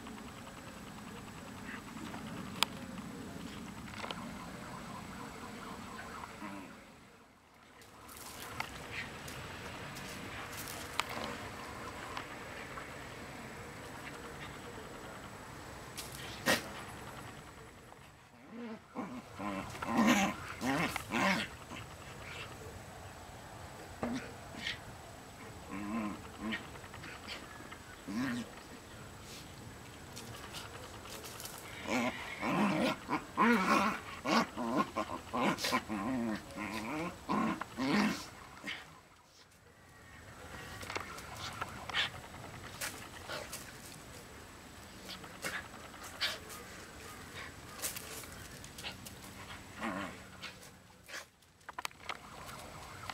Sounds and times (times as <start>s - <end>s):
Outside, rural or natural: 0.0s - 53.1s.